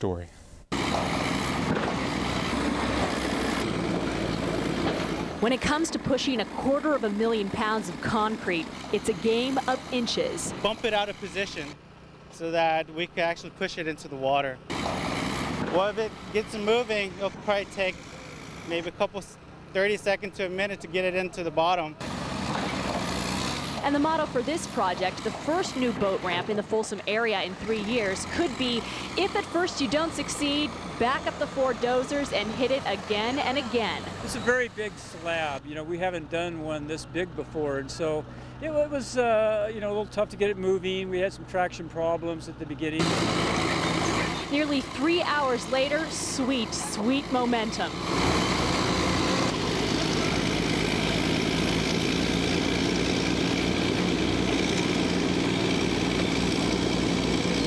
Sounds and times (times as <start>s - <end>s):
Speech: 0.0s - 0.4s, 5.4s - 11.8s, 12.4s - 14.6s, 15.7s - 18.0s, 18.7s - 22.0s, 23.9s - 43.0s
Boat, Water vehicle: 13.9s - 35.4s, 40.6s - 57.6s.